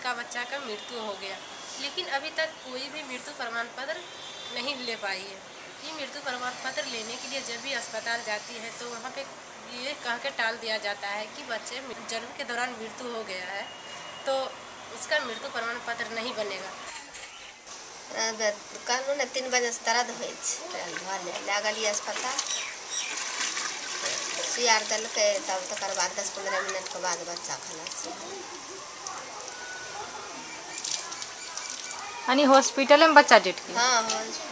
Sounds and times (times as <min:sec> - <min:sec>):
Outside, rural or natural: 0:16.2 - 0:34.5.